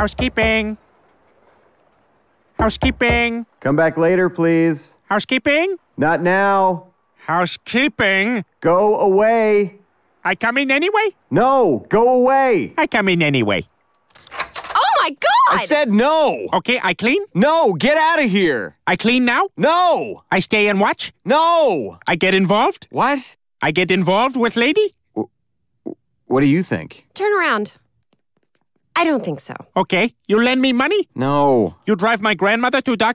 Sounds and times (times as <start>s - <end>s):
Speech: 14.8s - 25.0s, 26.3s - 27.8s, 29.0s - 33.1s.